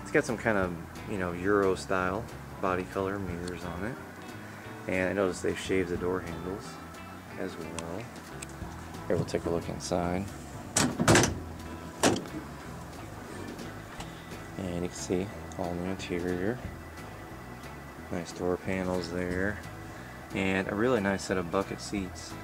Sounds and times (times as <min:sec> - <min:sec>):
Speech: 0:00.0 - 0:04.0, 0:04.9 - 0:08.1, 0:09.1 - 0:10.3, 0:14.6 - 0:16.6, 0:18.1 - 0:19.6, 0:20.3 - 0:22.4
Music: 0:00.0 - 0:22.4.